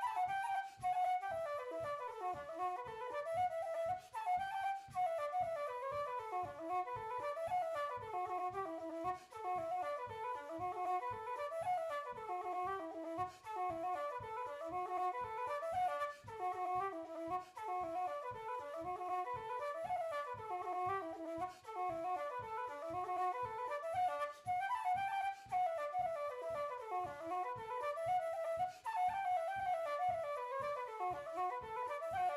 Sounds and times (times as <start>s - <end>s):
Flute: 0.0s - 32.3s.